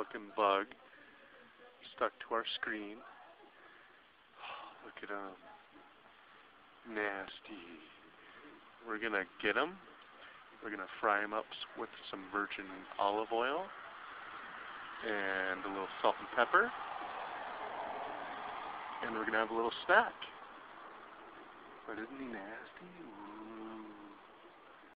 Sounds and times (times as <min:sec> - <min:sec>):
Speech: 0:00.0 - 0:03.6, 0:04.8 - 0:05.9, 0:06.8 - 0:08.0, 0:08.8 - 0:09.8, 0:10.6 - 0:13.7, 0:15.0 - 0:16.8, 0:19.0 - 0:20.4, 0:21.9 - 0:24.2.